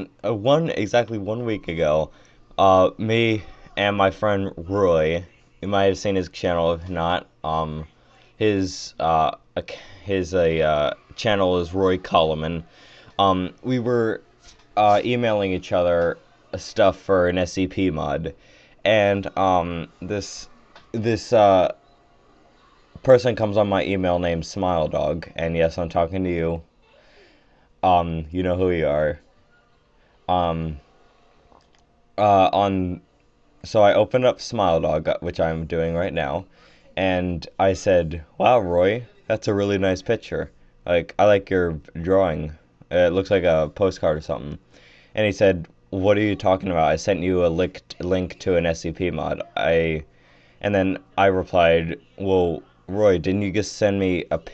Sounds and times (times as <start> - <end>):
Speech: 0.0 - 21.8, 22.6 - 26.7, 27.8 - 29.4, 30.3 - 30.9, 32.2 - 33.0, 33.6 - 44.6, 45.2 - 54.5.